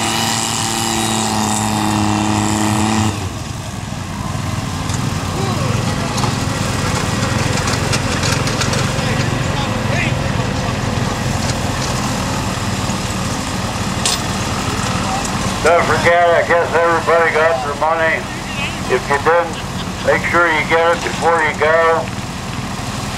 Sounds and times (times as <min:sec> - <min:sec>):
Truck: 0:00.0 - 0:23.1
Speech: 0:09.0 - 0:10.2, 0:14.9 - 0:22.1.